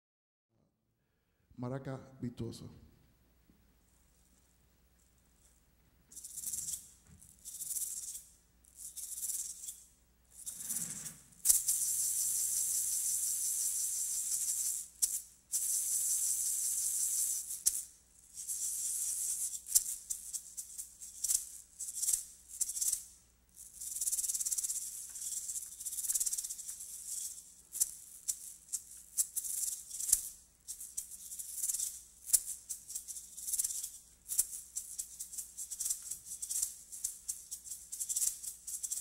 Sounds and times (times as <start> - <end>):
Maraca: 6.1 - 39.0.